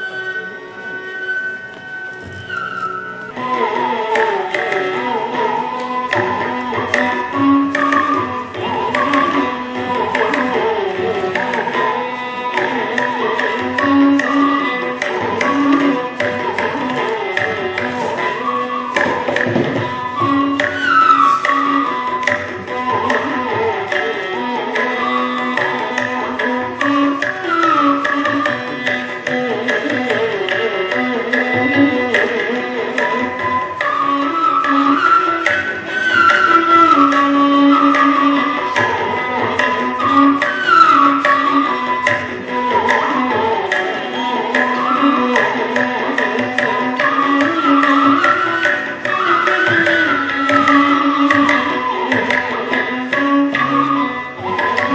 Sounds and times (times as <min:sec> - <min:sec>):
Classical music: 0:00.0 - 0:29.9.